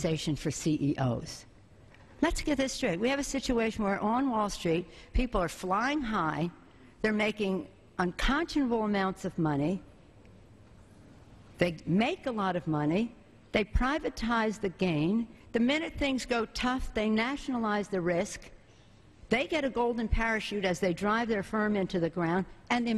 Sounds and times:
Female speech, woman speaking: 0.0 - 1.5, 2.2 - 9.8, 11.6 - 18.5, 19.3 - 22.9
Narration, monologue: 0.0 - 22.9.

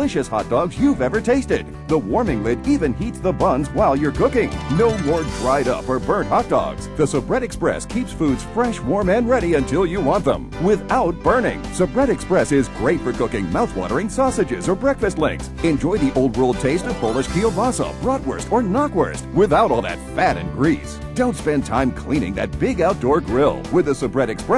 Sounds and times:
Music: 0.0 - 24.5
Speech: 0.0 - 24.5.

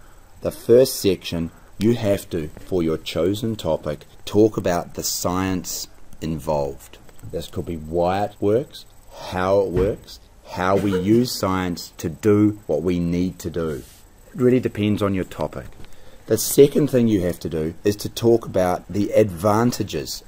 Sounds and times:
Speech: 0.4 - 20.2.

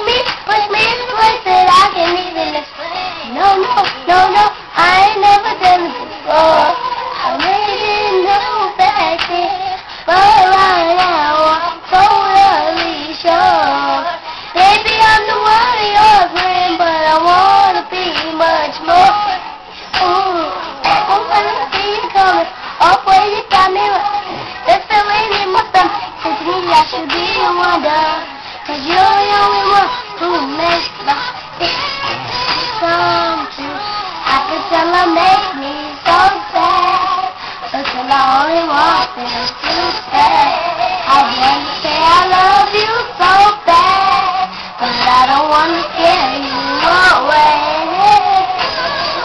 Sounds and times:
Child singing: 0.0 - 49.2
Music: 0.0 - 49.2.

